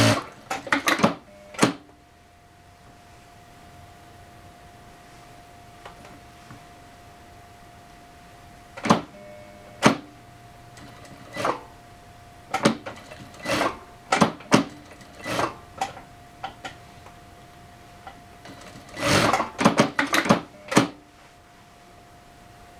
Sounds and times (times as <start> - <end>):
Sewing machine: 0.0 - 1.8, 8.8 - 9.2, 9.8 - 10.1, 10.8 - 11.7, 12.5 - 16.0, 18.4 - 21.0.